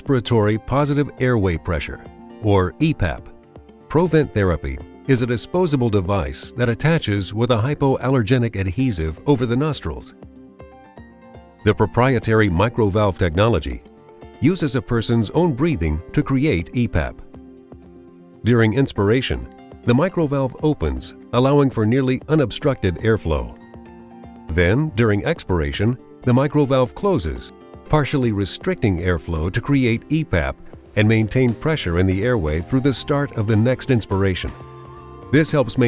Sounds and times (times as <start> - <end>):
Speech: 0.0 - 3.3, 3.9 - 10.2, 11.7 - 13.8, 14.4 - 17.3, 18.4 - 23.6, 24.5 - 34.6, 35.4 - 35.8
Music: 0.0 - 35.8.